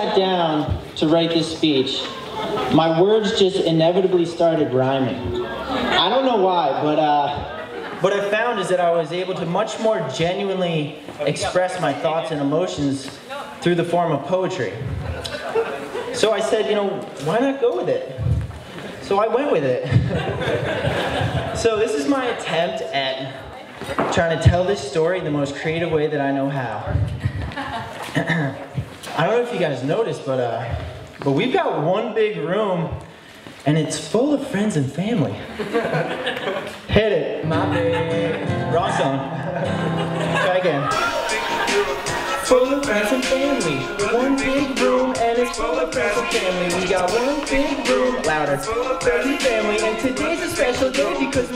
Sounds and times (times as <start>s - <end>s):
Male speech, man speaking: 0.0s - 5.3s, 5.9s - 14.9s, 16.1s - 18.2s, 19.0s - 20.0s, 21.6s - 23.5s, 24.1s - 27.0s, 28.2s - 33.0s, 33.6s - 35.5s, 36.9s - 39.4s, 40.4s - 41.0s.